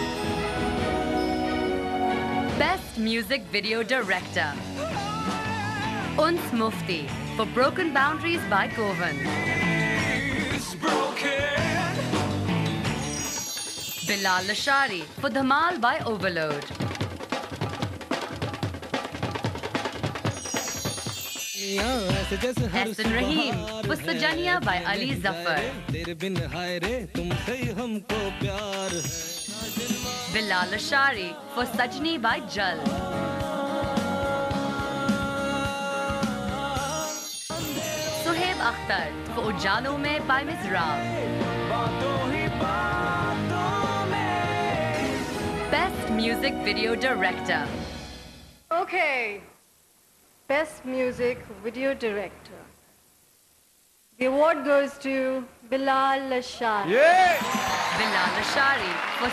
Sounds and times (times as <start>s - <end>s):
Music: 0.0s - 48.6s, 57.2s - 59.3s
Speech: 14.1s - 16.7s, 21.6s - 25.9s.